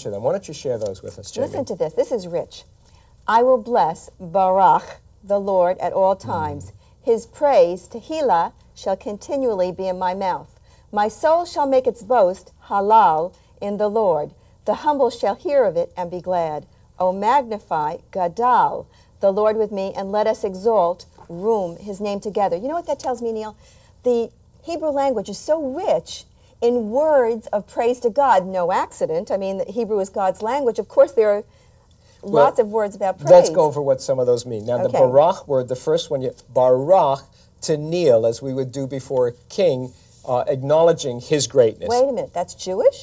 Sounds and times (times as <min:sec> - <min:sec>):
Speech: 0:06.2 - 0:06.7, 0:32.3 - 0:36.9.